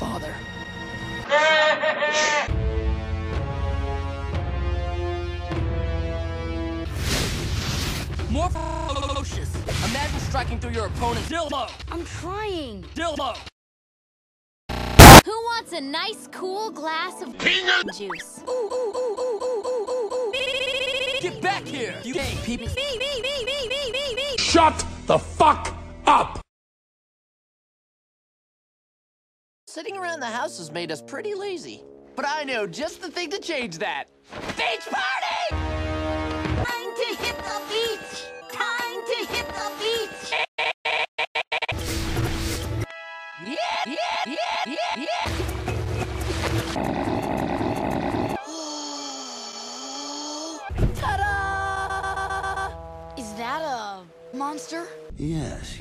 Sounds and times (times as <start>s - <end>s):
Music: 0.0s - 1.4s, 2.2s - 13.2s, 15.2s - 19.1s, 20.8s - 22.8s, 24.3s - 26.4s, 29.7s - 40.3s, 41.8s - 43.6s, 45.3s - 46.8s, 50.3s - 55.8s.